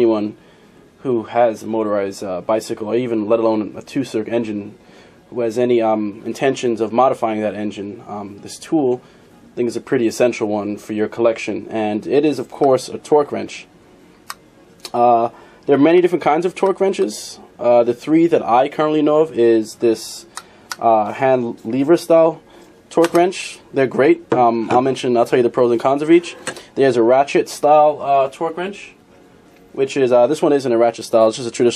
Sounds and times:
Speech: 0:00.0 - 0:00.4, 0:01.0 - 0:09.0, 0:09.6 - 0:13.7, 0:14.9 - 0:29.0, 0:29.8 - 0:31.7.

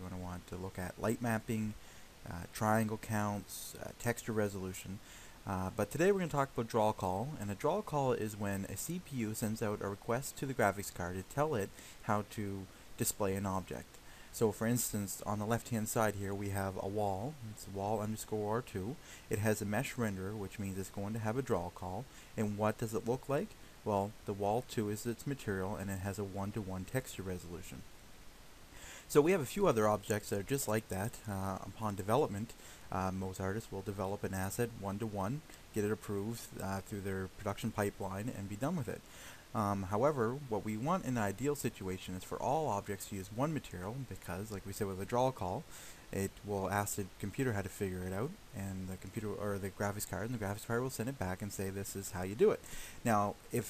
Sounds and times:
Speech: 0:00.0 - 0:27.8, 0:29.1 - 0:53.6.

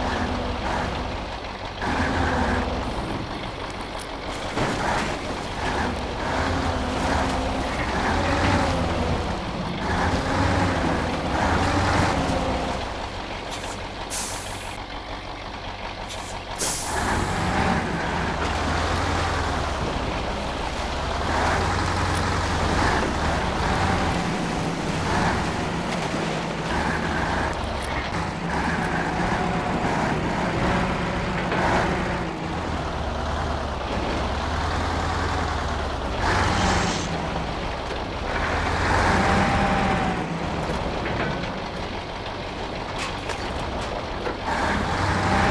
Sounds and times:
Outside, rural or natural: 0:00.0 - 0:45.5
Truck: 0:00.0 - 0:45.5.

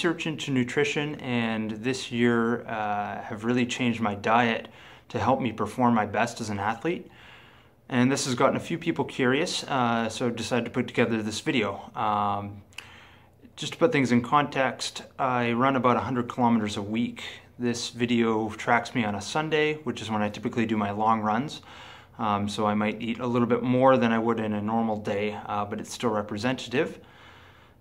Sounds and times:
Speech: 0:00.0 - 0:07.1, 0:07.9 - 0:12.6, 0:13.4 - 0:21.6, 0:22.2 - 0:27.0
Inside, small room: 0:00.0 - 0:27.8.

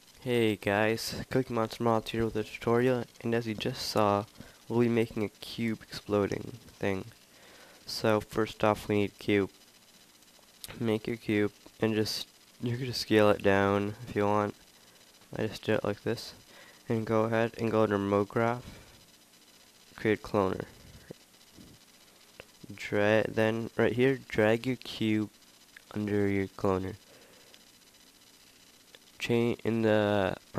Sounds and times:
Speech: 0:00.2 - 0:07.1, 0:07.9 - 0:09.5, 0:10.7 - 0:14.6, 0:15.4 - 0:18.7, 0:20.0 - 0:20.7, 0:22.7 - 0:25.3, 0:25.9 - 0:27.0, 0:29.2 - 0:30.5.

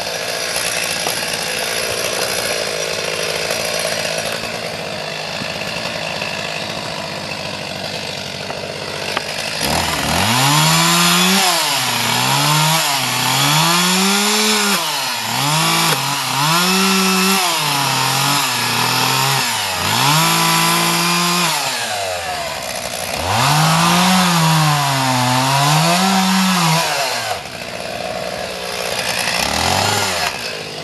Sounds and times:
Chainsaw: 0:00.0 - 0:30.8.

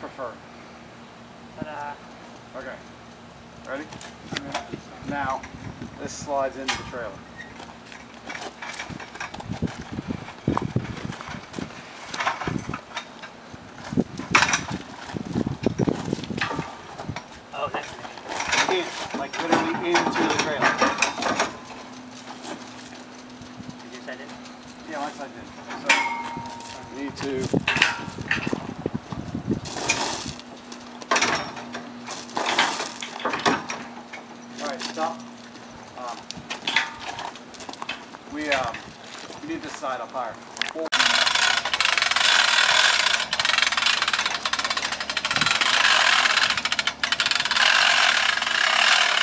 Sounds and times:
Speech: 0:01.6 - 0:02.0, 0:06.0 - 0:07.2, 0:18.6 - 0:20.8, 0:24.9 - 0:26.0, 0:26.9 - 0:27.5, 0:34.6 - 0:35.2, 0:38.3 - 0:38.8, 0:39.4 - 0:40.9.

